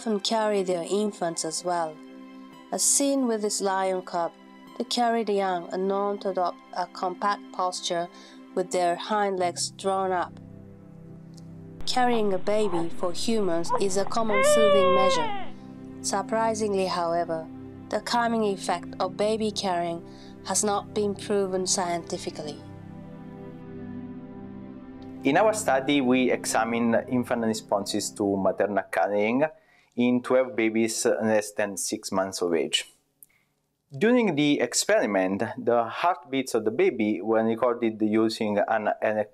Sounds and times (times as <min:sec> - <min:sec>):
Speech: 0:00.0 - 0:02.0, 0:02.8 - 0:10.3, 0:11.9 - 0:15.4, 0:16.1 - 0:22.6, 0:25.3 - 0:32.9, 0:34.0 - 0:39.3
Music: 0:00.0 - 0:31.2.